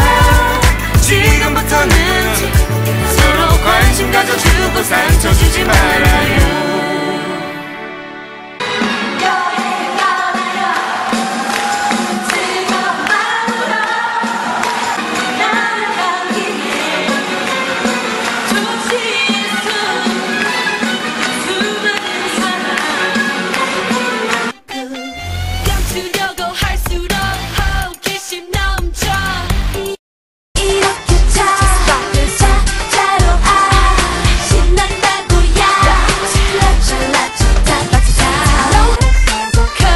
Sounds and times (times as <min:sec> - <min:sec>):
Music: 0:00.0 - 0:30.0, 0:30.6 - 0:39.9
Female singing: 0:03.1 - 0:07.6, 0:09.1 - 0:11.2, 0:12.2 - 0:14.7, 0:15.3 - 0:29.6, 0:30.6 - 0:39.9.